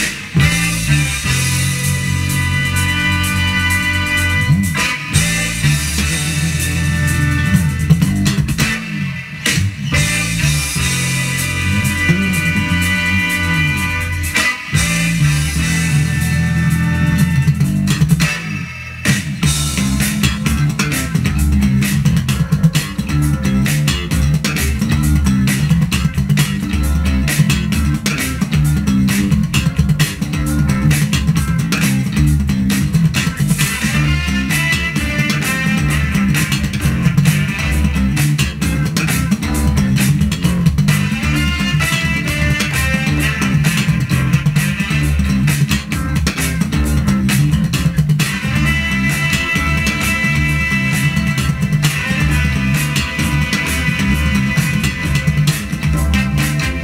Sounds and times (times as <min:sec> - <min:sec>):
Funk: 0:00.0 - 0:56.8.